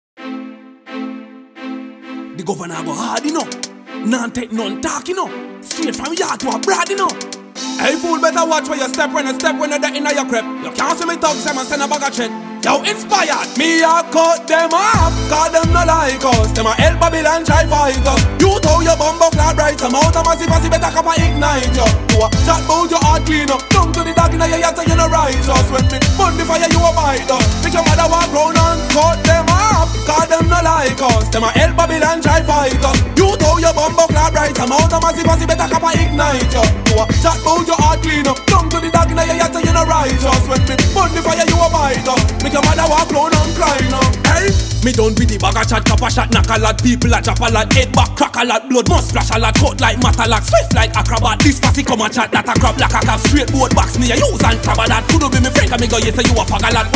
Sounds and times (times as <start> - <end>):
Exciting music: 0.2 - 56.9.